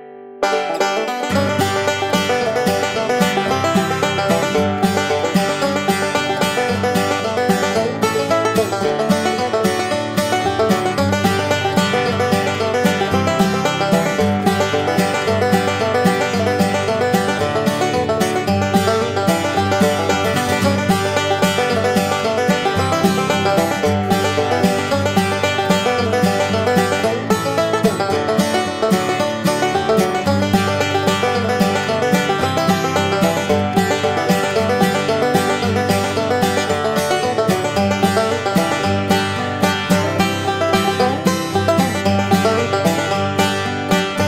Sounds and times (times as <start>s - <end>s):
Music: 0.0s - 44.2s.